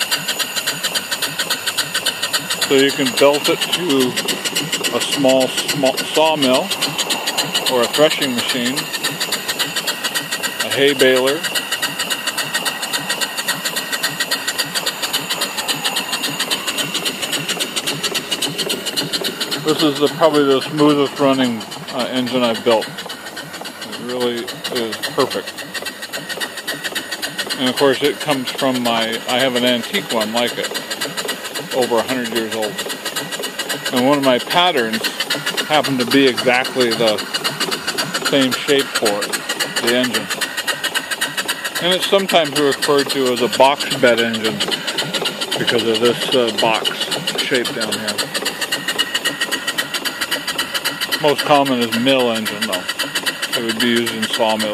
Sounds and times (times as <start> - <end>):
Engine: 0.0 - 54.7
Steam: 0.0 - 54.7
Speech: 2.7 - 4.2, 4.9 - 6.7, 7.7 - 8.9, 10.6 - 11.5, 19.6 - 22.9, 23.9 - 25.5, 27.5 - 30.7, 31.7 - 32.8, 33.9 - 37.2, 38.3 - 40.3, 41.8 - 44.8, 45.6 - 48.3, 51.2 - 52.9, 53.5 - 54.7.